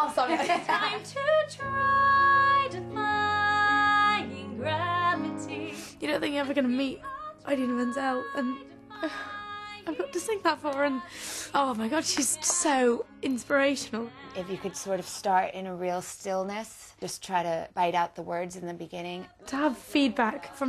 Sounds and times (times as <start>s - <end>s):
Female speech, woman speaking: 0.0s - 0.5s, 11.6s - 20.6s
Music: 0.0s - 20.6s
Singing: 0.9s - 15.5s, 19.0s - 20.6s.